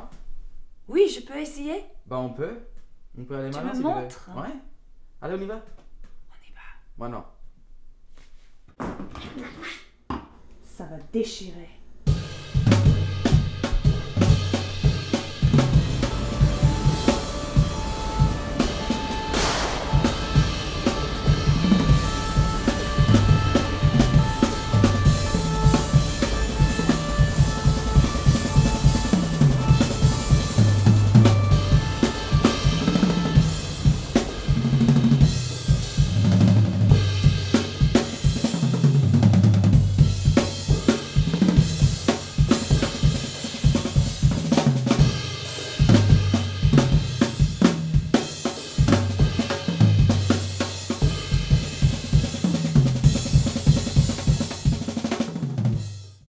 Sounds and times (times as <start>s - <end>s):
Drum roll: 12.0s - 56.3s
Drum kit: 12.1s - 56.3s.